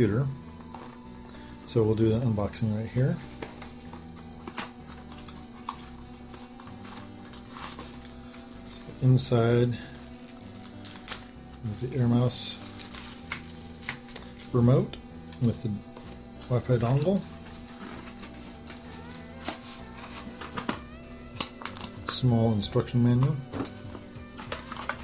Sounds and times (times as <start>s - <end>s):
Music: 0.0s - 25.0s
Speech: 1.7s - 3.2s, 8.7s - 9.9s, 11.6s - 12.6s, 14.5s - 15.8s, 16.4s - 17.3s, 22.1s - 23.4s.